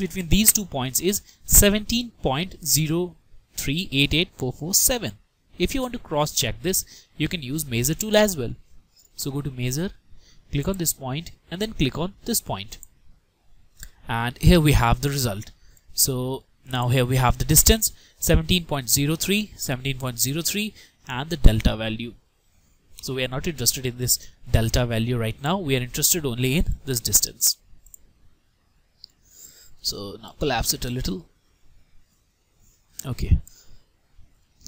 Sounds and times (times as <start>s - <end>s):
Speech: 0.0s - 8.6s, 9.2s - 12.9s, 14.0s - 22.2s, 23.0s - 27.6s, 29.8s - 31.3s, 33.0s - 33.5s
Inside, small room: 0.0s - 34.6s
Clicking: 12.8s - 13.0s.